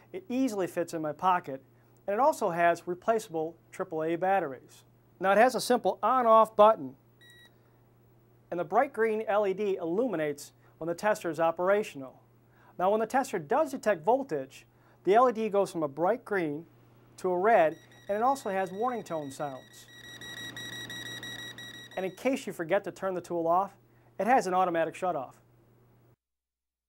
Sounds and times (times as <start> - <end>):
Speech: 0.2 - 7.0, 8.5 - 12.2, 12.8 - 19.8, 22.0 - 25.4.